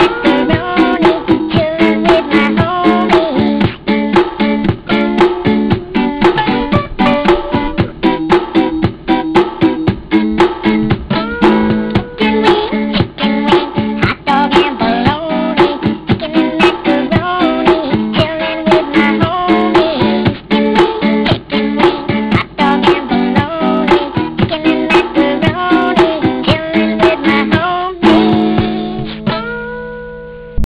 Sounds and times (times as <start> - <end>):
Music: 0.0 - 30.7.